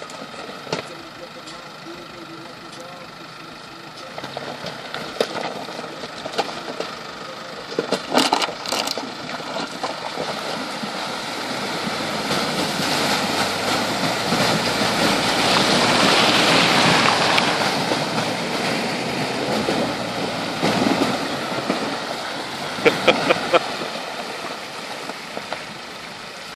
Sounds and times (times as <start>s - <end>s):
Stream: 0.0s - 26.5s.